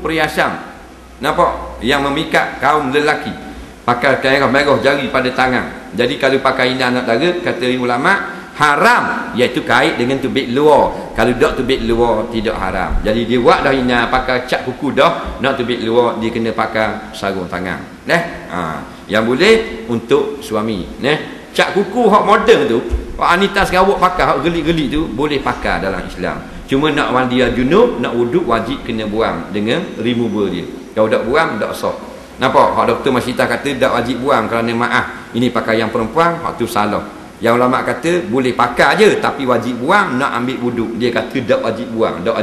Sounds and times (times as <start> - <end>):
Speech: 0.0 - 42.4.